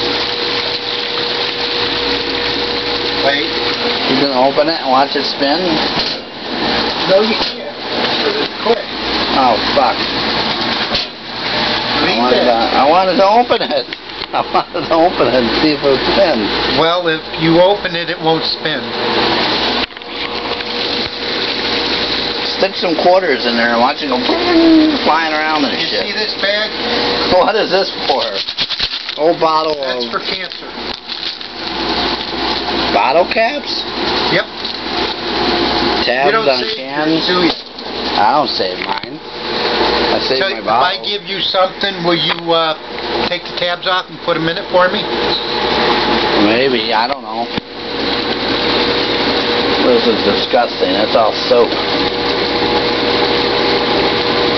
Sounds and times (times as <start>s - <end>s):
Pump (liquid): 0.0s - 54.5s
Water: 0.0s - 54.5s.